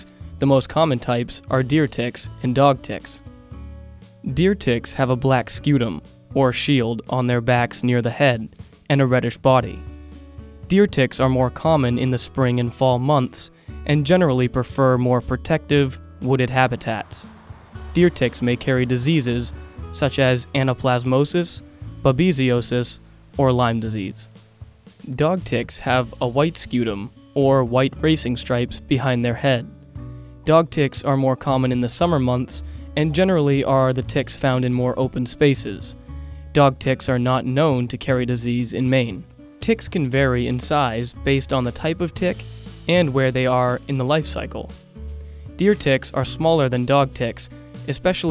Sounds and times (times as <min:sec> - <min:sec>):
Speech: 0:00.0 - 0:03.2, 0:04.3 - 0:09.8, 0:10.7 - 0:17.3, 0:17.9 - 0:24.3, 0:25.0 - 0:29.8, 0:30.5 - 0:36.0, 0:36.6 - 0:44.8, 0:45.6 - 0:48.3
Music: 0:00.0 - 0:48.3.